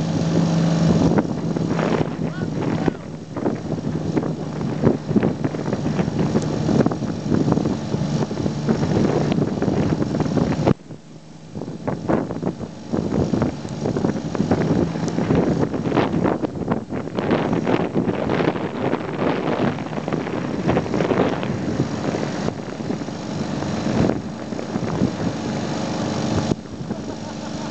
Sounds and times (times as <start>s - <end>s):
Motorboat, speedboat: 0.0s - 27.7s.